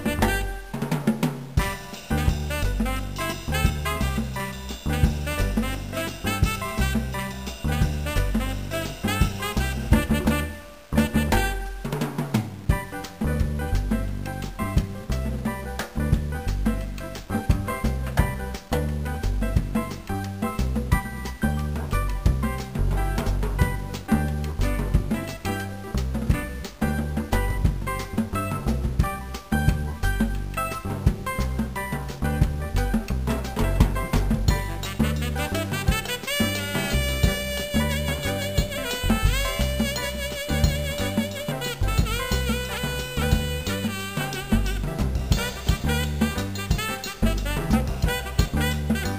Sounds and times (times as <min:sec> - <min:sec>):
Jingle (music): 0:00.0 - 0:49.1.